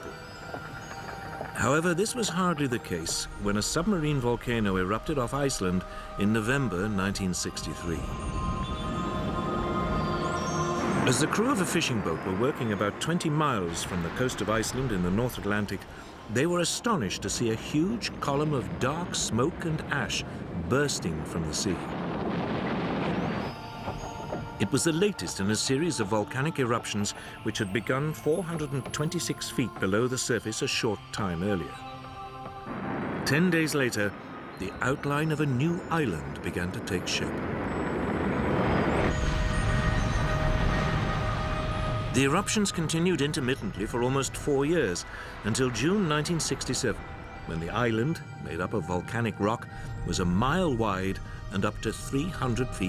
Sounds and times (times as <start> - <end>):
Music: 0.0 - 22.0, 22.6 - 37.2, 38.7 - 52.8
Speech: 1.6 - 8.0, 11.1 - 21.9, 24.6 - 31.7, 33.3 - 37.3, 42.2 - 52.8.